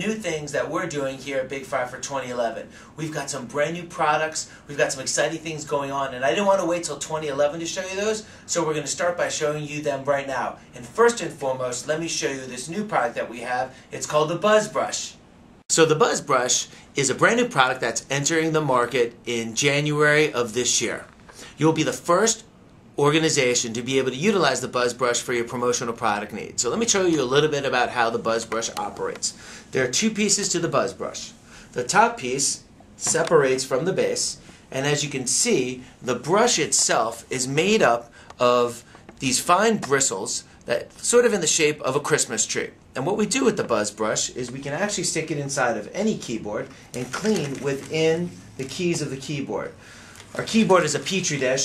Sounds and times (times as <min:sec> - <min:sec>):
Speech: 0:00.0 - 0:51.6.